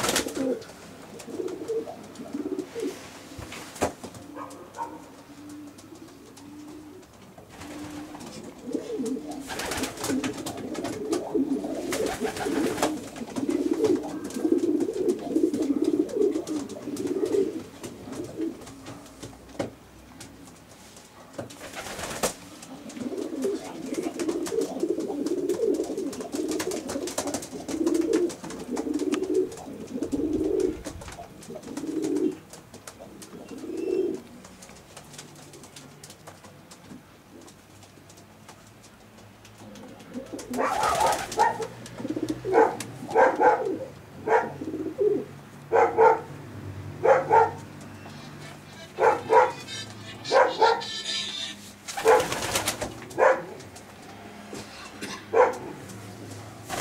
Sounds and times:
Coo: 0:00.0 - 0:03.0, 0:04.2 - 0:18.8, 0:22.7 - 0:34.2, 0:39.6 - 0:45.3.

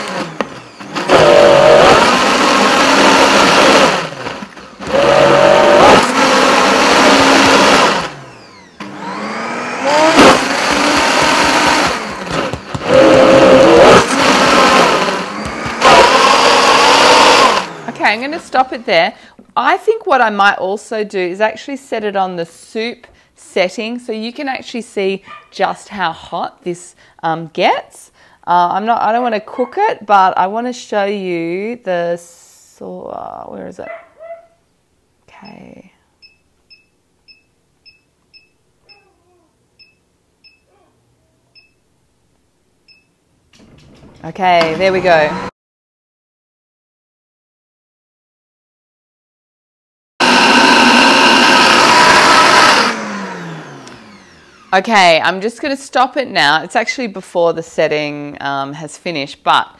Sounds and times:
Blender: 0:00.0 - 0:18.2, 0:44.5 - 0:45.5, 0:50.2 - 0:55.2.

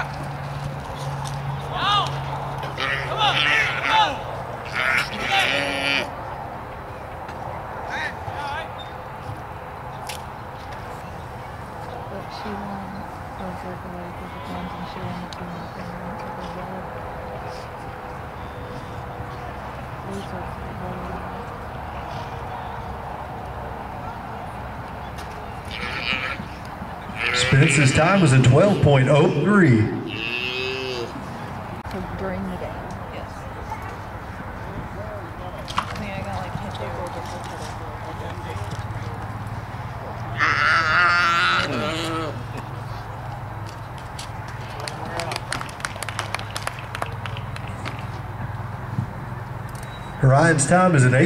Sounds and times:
Livestock, farm animals, working animals: 0:25.6 - 0:28.2, 0:40.2 - 0:43.1.

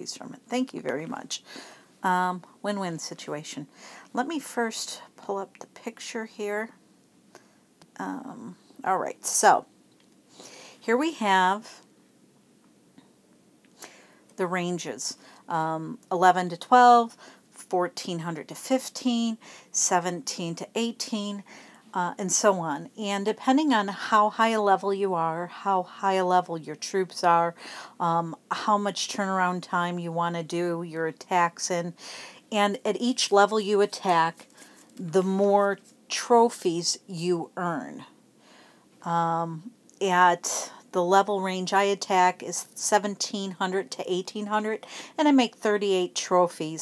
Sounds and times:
Speech: 0:00.0 - 0:01.4, 0:02.0 - 0:06.8, 0:08.0 - 0:09.7, 0:10.8 - 0:11.8, 0:14.4 - 0:21.4, 0:22.0 - 0:34.4, 0:35.0 - 0:38.1, 0:39.0 - 0:46.8.

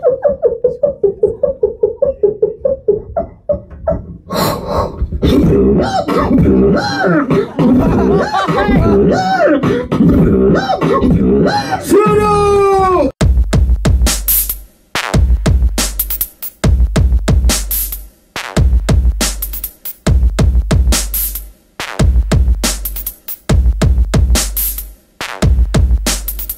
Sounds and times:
Beatboxing: 0:00.0 - 0:11.9, 0:20.7 - 0:26.5.

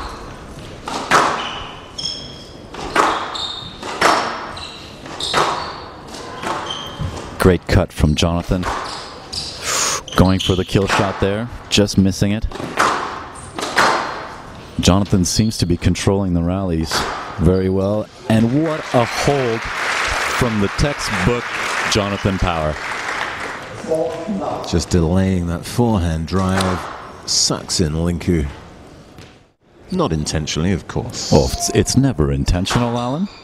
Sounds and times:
Inside, large room or hall: 0:00.0 - 0:33.4
Speech: 0:07.4 - 0:08.7, 0:10.0 - 0:12.6, 0:14.8 - 0:22.8, 0:23.8 - 0:28.6, 0:29.9 - 0:33.4.

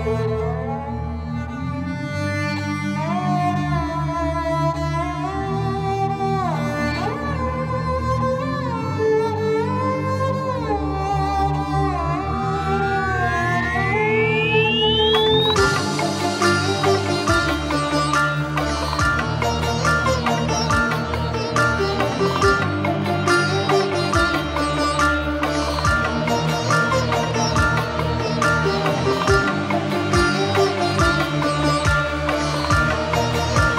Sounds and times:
Dubstep: 0:13.3 - 0:33.7.

